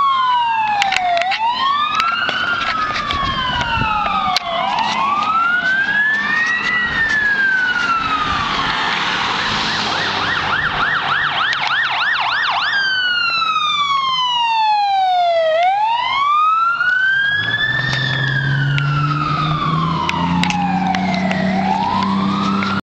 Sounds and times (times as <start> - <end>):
Vehicle: 0.0 - 22.8.